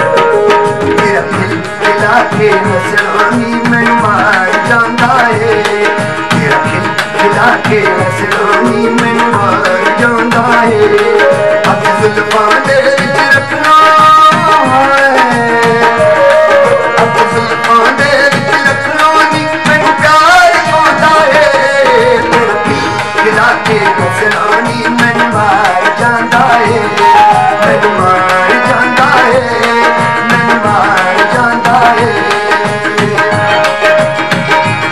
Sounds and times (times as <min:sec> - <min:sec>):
Folk music: 0:00.0 - 0:34.9.